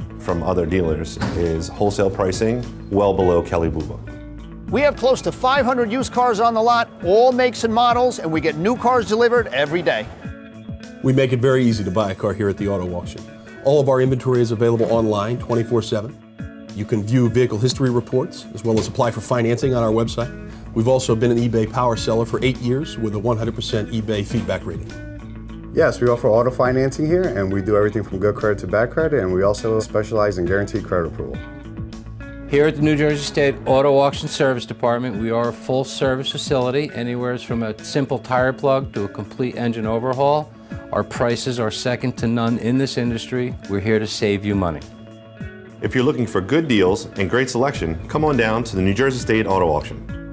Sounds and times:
Music: 0.0 - 50.3
Speech: 0.2 - 4.0, 4.7 - 10.1, 11.0 - 16.2, 16.8 - 24.9, 25.8 - 31.4, 32.5 - 44.9, 45.8 - 50.0.

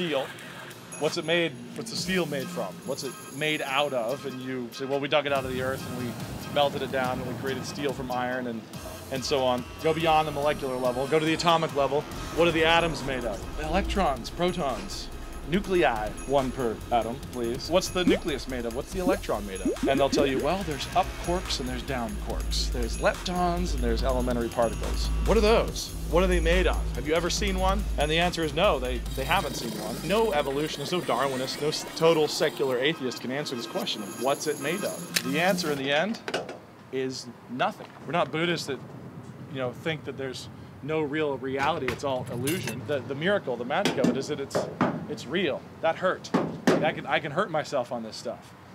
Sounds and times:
Speech: 0.0 - 0.3, 1.0 - 36.2, 37.0 - 38.8, 39.5 - 48.5
Music: 0.0 - 35.8.

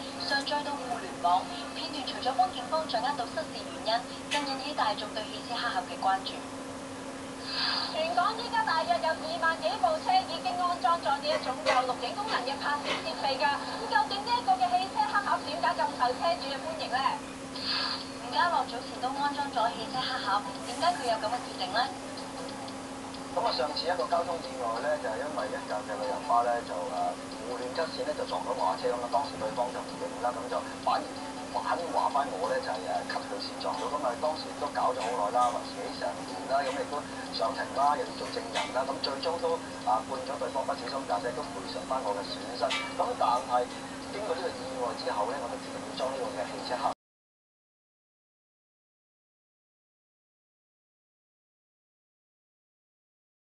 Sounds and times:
Speech: 0.2 - 6.5, 8.0 - 17.2, 18.2 - 22.0, 23.4 - 47.0.

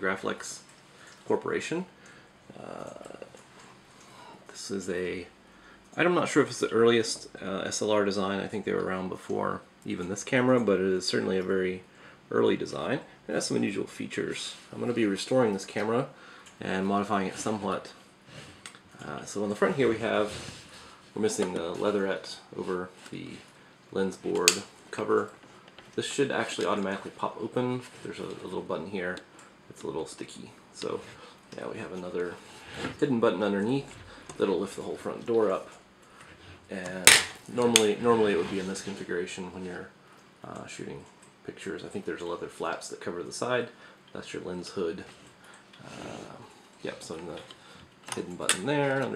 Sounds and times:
Speech: 0.0 - 0.7, 1.3 - 3.4, 4.4 - 5.4, 6.0 - 18.0, 19.0 - 25.4, 26.0 - 35.8, 36.7 - 45.2, 45.8 - 47.5, 48.1 - 49.1.

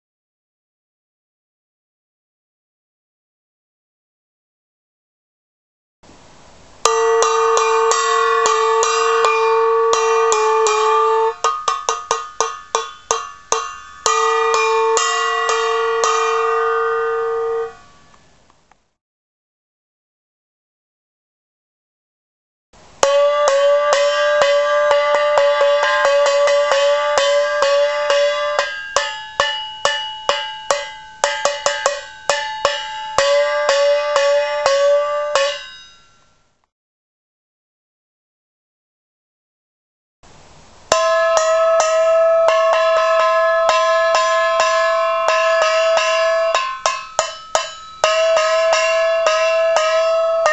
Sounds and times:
Musical instrument: 6.9 - 18.2, 23.0 - 35.9, 40.9 - 50.5.

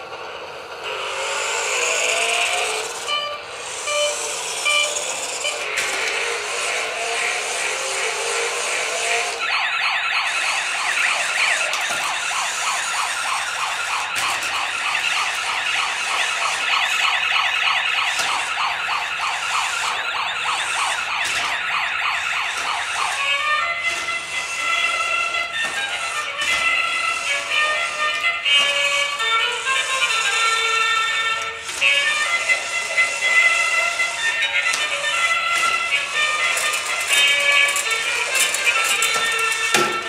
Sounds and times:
Music: 22.6 - 40.0.

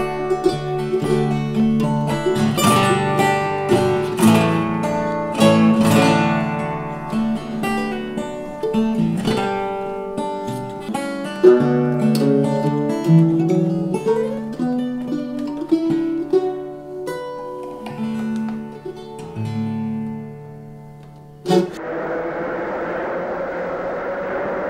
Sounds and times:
Guitar: 0.0 - 24.6.

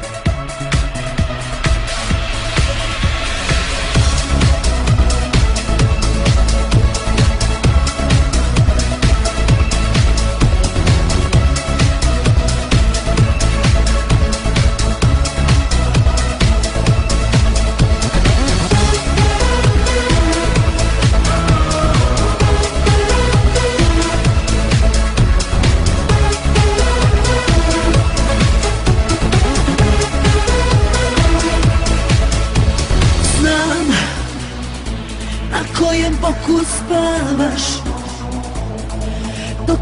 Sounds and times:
Music: 0.0 - 39.8.

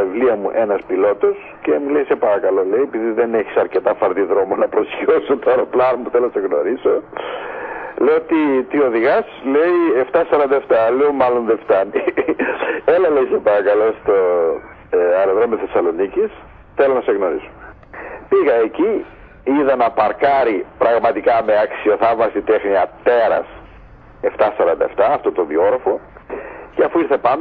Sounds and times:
Speech: 0.0 - 7.3, 8.0 - 17.7, 18.3 - 27.4
Radio: 0.0 - 27.4.

